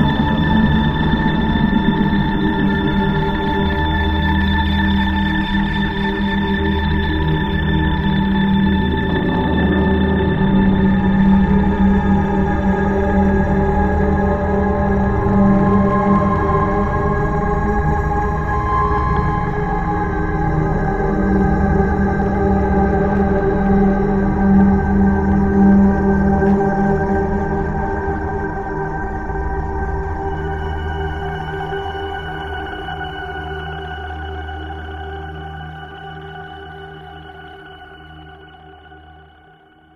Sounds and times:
Ambient music: 0.0 - 39.6.

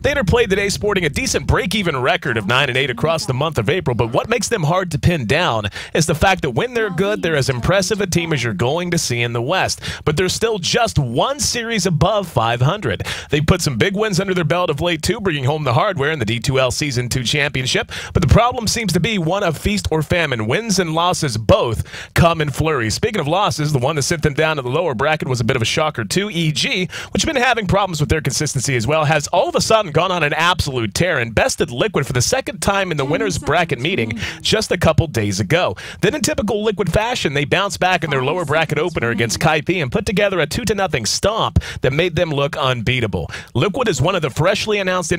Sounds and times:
Speech: 0.0 - 45.1.

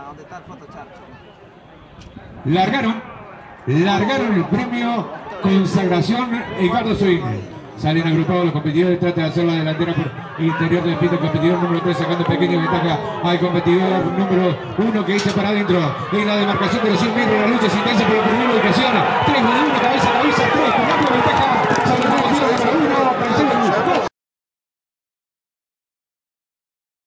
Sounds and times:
Speech: 0.0 - 1.3, 2.2 - 3.1, 3.7 - 24.1.

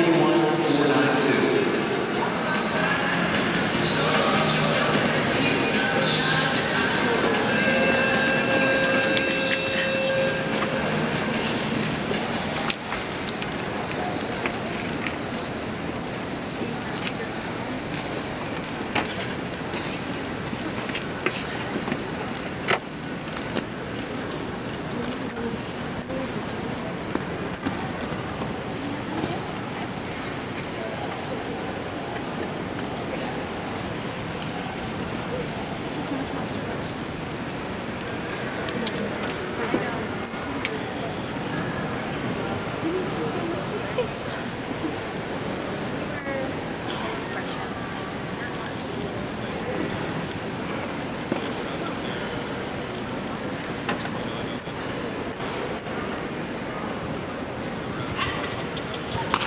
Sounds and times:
Speech: 0.0 - 22.6, 23.7 - 59.4.

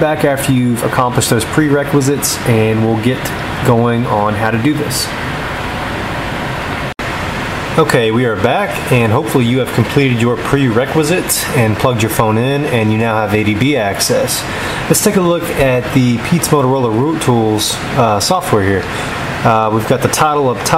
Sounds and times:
Speech: 0.0 - 5.2, 7.8 - 20.7.

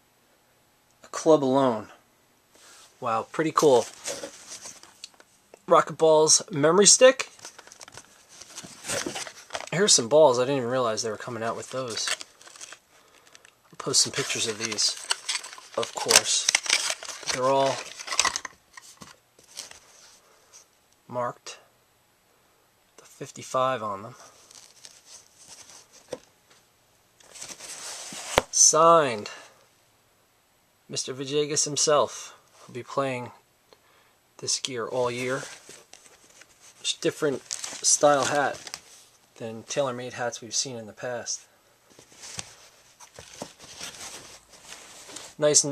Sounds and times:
Speech: 1.0 - 2.0, 3.0 - 4.0, 5.6 - 7.3, 9.7 - 12.2, 13.8 - 15.0, 15.8 - 16.5, 17.3 - 17.8, 21.1 - 21.7, 23.0 - 24.2, 28.5 - 29.6, 30.9 - 33.4, 34.4 - 35.5, 36.8 - 38.6, 39.4 - 41.5, 45.4 - 45.7.

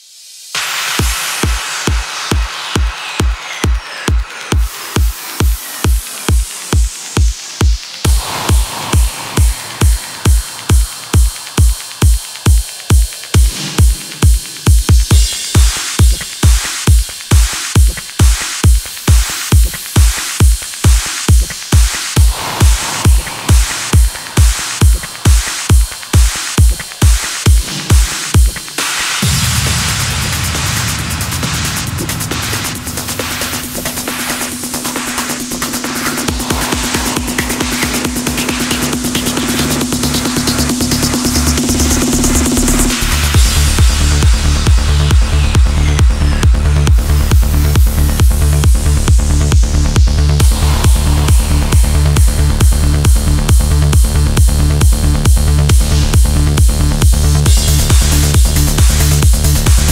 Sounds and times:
Music: 0.0 - 59.9.

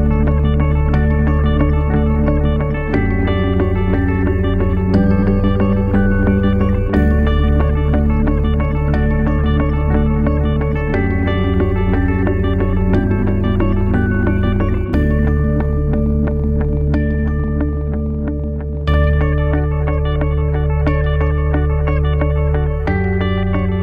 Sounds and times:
Music: 0.0 - 23.8.

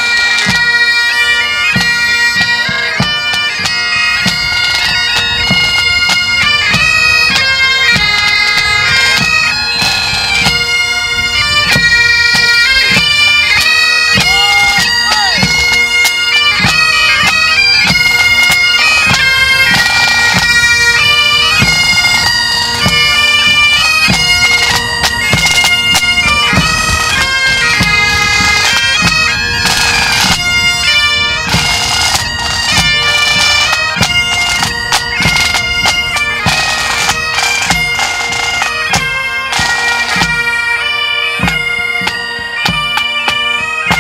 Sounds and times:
Music: 0.0 - 44.0
Clip-clop: 1.5 - 40.7
Speech: 14.2 - 15.5.

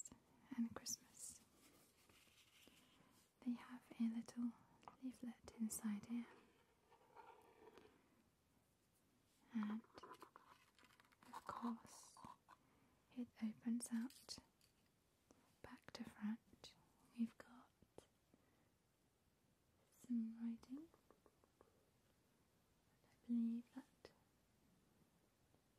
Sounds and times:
Inside, small room: 0.0 - 25.7.

